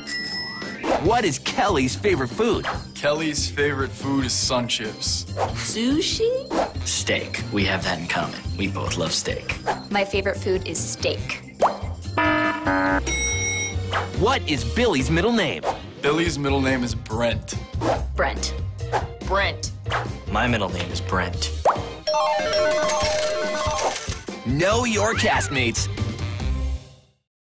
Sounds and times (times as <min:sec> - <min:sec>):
Music: 0:00.0 - 0:27.3
Speech: 0:24.5 - 0:25.9.